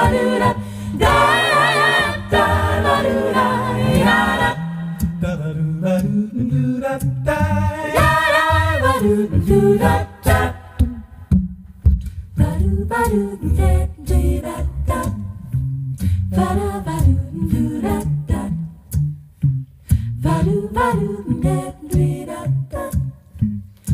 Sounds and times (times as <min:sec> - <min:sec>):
Singing: 0:00.0 - 0:04.6, 0:05.2 - 0:10.8
A capella: 0:00.0 - 0:11.4, 0:12.0 - 0:19.2, 0:19.8 - 0:23.9.